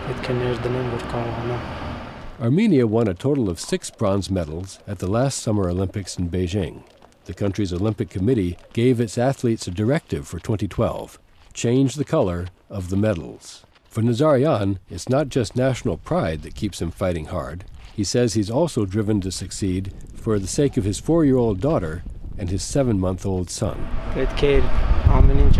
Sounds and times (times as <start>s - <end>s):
Speech: 0.0s - 1.6s, 2.4s - 25.5s.